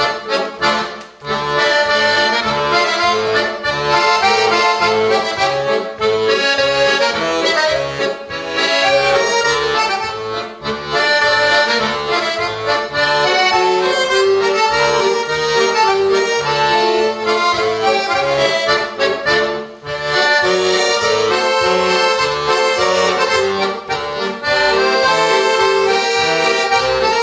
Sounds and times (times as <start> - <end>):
Accordion: 0.0 - 27.2.